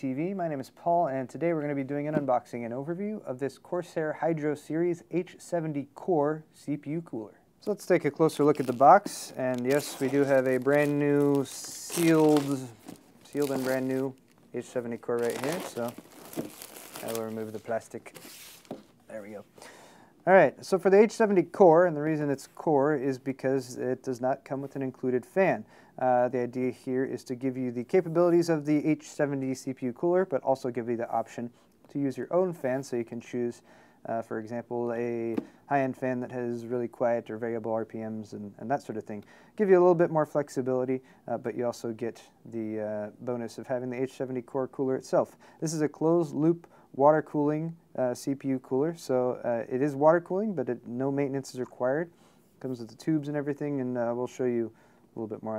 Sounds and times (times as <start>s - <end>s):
Speech: 0.0s - 16.0s, 17.0s - 18.2s, 19.1s - 19.5s, 20.2s - 55.5s.